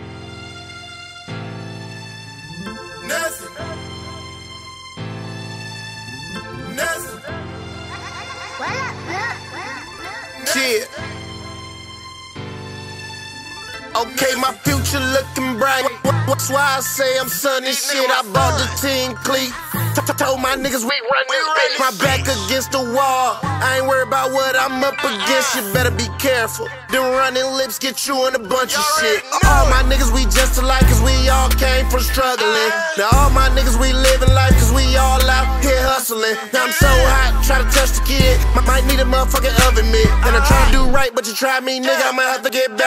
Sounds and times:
Music: 0:00.0 - 0:42.8.

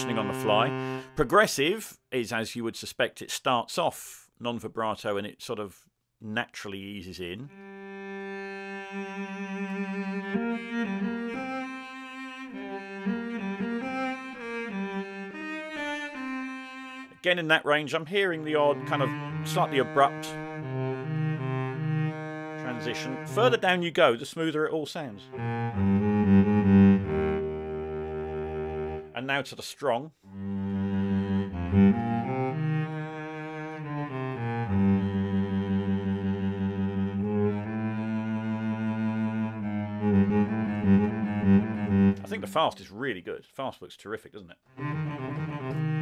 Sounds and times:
Cello: 0:00.0 - 0:01.2, 0:07.5 - 0:17.2, 0:18.2 - 0:23.8, 0:25.2 - 0:29.2, 0:30.3 - 0:42.7, 0:44.8 - 0:46.0
Double bass: 0:00.0 - 0:01.2, 0:18.2 - 0:23.7, 0:25.3 - 0:29.2, 0:30.4 - 0:42.7, 0:44.8 - 0:46.0
Speech: 0:00.0 - 0:07.5, 0:17.2 - 0:20.4, 0:22.6 - 0:25.3, 0:29.2 - 0:30.1, 0:42.2 - 0:44.6.

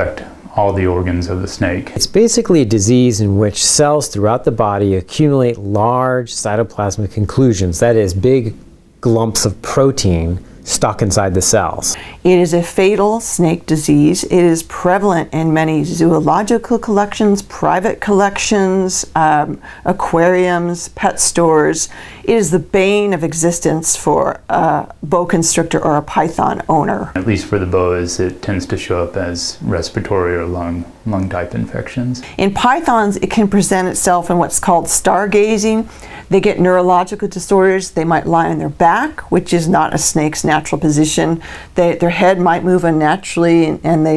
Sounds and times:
Inside, small room: 0:00.0 - 0:44.1
Speech: 0:00.0 - 0:44.1.

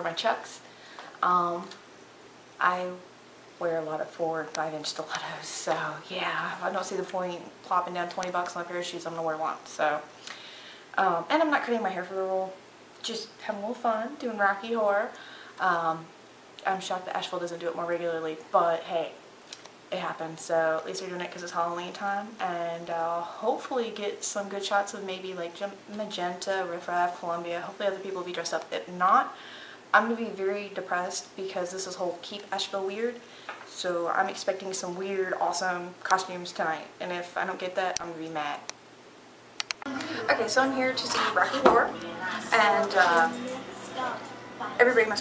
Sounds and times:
Speech: 0:00.0 - 0:00.6, 0:01.2 - 0:01.8, 0:02.6 - 0:10.1, 0:11.0 - 0:19.2, 0:19.9 - 0:29.4, 0:30.0 - 0:38.7, 0:39.9 - 0:45.2
Inside, small room: 0:00.0 - 0:45.2.

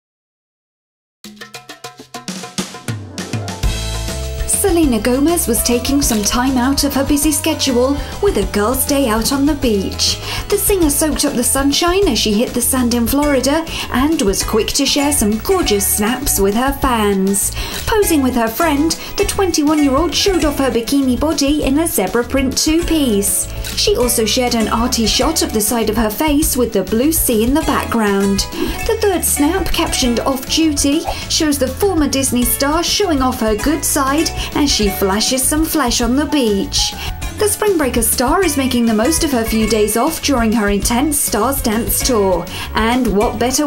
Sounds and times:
Music: 0:01.2 - 0:43.6
Speech: 0:04.5 - 0:43.6.

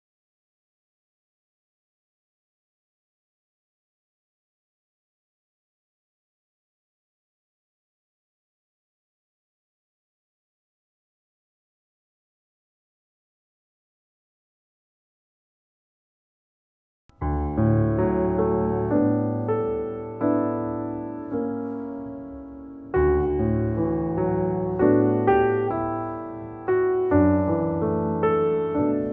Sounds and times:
Music: 0:17.1 - 0:29.1.

